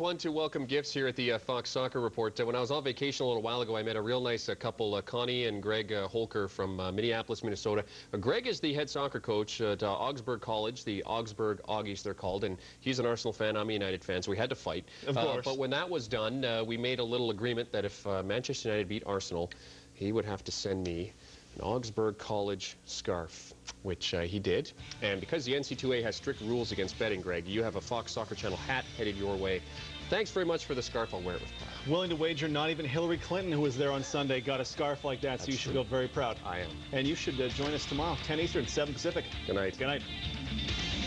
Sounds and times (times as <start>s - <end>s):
Speech: 0.0s - 40.0s
Music: 24.8s - 41.0s.